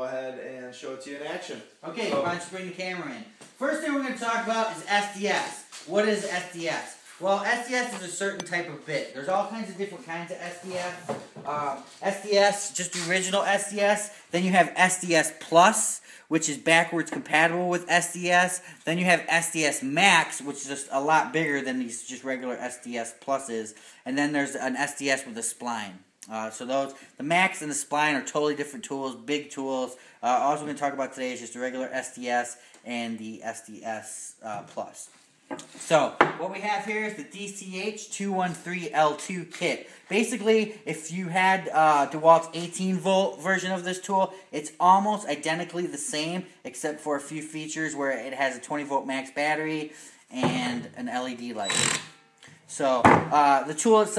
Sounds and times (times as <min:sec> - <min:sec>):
Speech: 0:00.0 - 0:35.2, 0:35.8 - 0:51.8, 0:52.7 - 0:54.1.